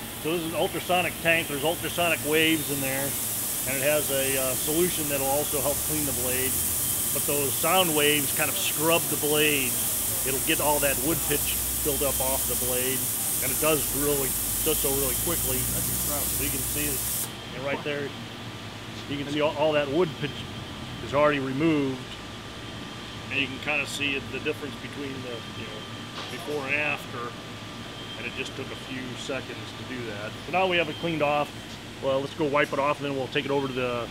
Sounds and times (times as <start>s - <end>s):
Speech: 0.3s - 6.6s, 7.2s - 18.2s, 19.0s - 22.2s, 23.3s - 27.4s, 28.2s - 34.1s.